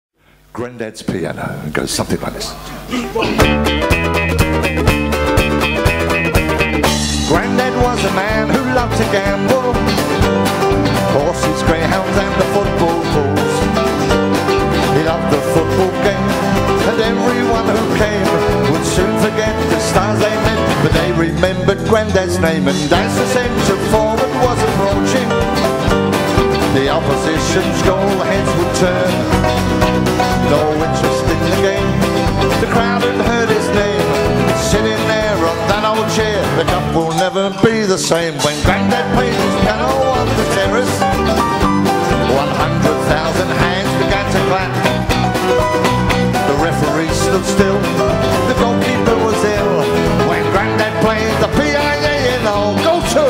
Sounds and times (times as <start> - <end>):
Jazz: 2.3 - 53.2
Orchestra: 3.3 - 53.2.